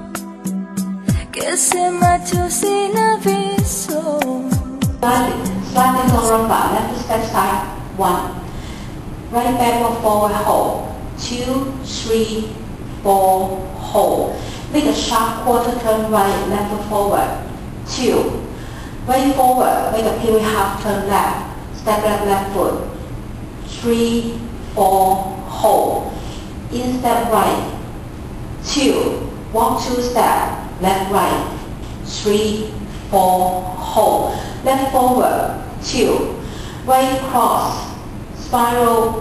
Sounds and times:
Speech: 4.0s - 8.5s, 9.3s - 23.0s, 23.7s - 27.8s, 28.6s - 39.2s.

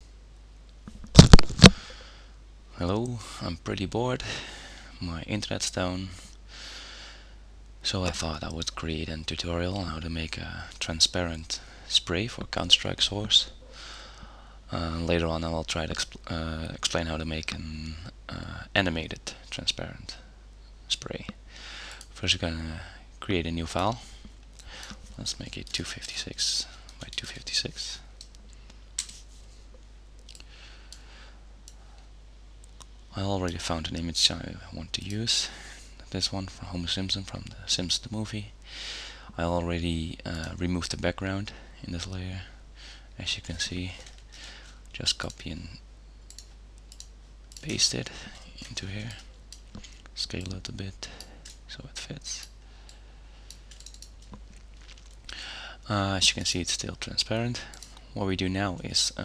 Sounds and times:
Speech: 2.8s - 6.3s, 7.8s - 13.6s, 14.7s - 20.3s, 20.9s - 21.4s, 22.1s - 24.2s, 25.2s - 28.1s, 33.1s - 38.6s, 39.3s - 42.6s, 43.2s - 44.1s, 44.9s - 45.8s, 47.6s - 49.3s, 50.2s - 52.5s, 55.8s - 59.2s.

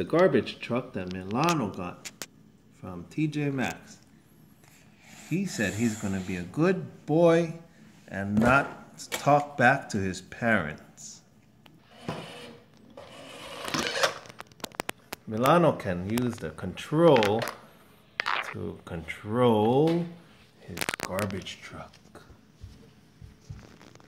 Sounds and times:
Speech: 0.0s - 2.1s, 2.8s - 4.0s, 5.3s - 11.3s, 15.3s - 17.6s, 18.5s - 22.4s.

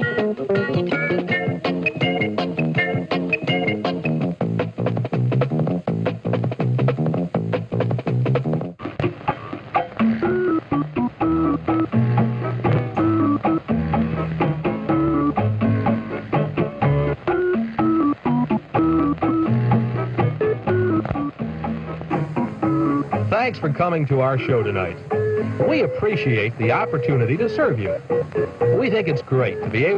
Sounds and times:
Music: 0.0s - 29.9s.

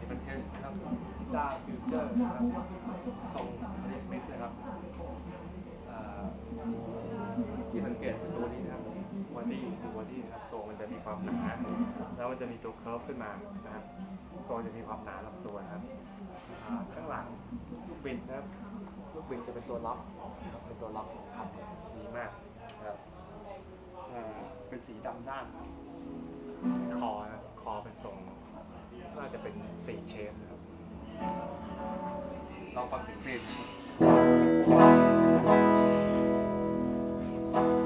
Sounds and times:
Speech: 0.0s - 26.0s, 26.8s - 33.9s.

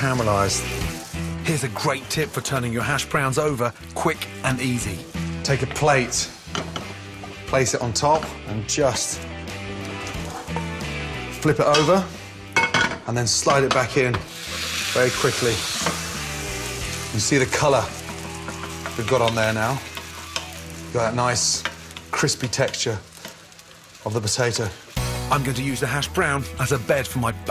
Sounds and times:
Speech: 0.0s - 0.6s, 1.4s - 6.3s, 7.5s - 9.2s, 11.4s - 12.1s, 13.1s - 14.2s, 15.0s - 15.7s, 17.2s - 17.9s, 19.0s - 19.8s, 21.0s - 23.0s, 24.0s - 27.5s
Music: 0.0s - 27.5s.

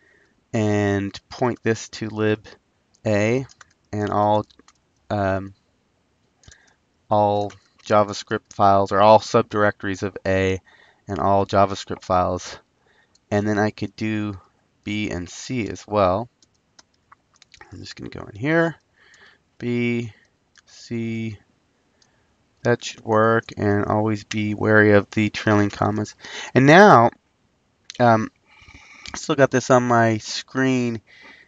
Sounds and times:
Speech: 0.6s - 4.5s, 5.1s - 5.5s, 7.1s - 12.6s, 13.3s - 16.3s, 17.6s - 18.8s, 19.6s - 21.4s, 22.7s - 27.2s, 27.9s - 28.3s, 29.1s - 31.0s.

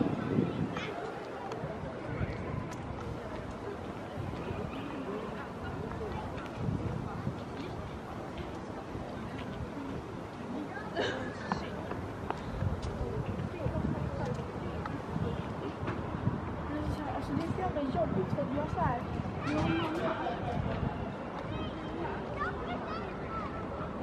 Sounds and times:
Speech: 0.0s - 24.0s.

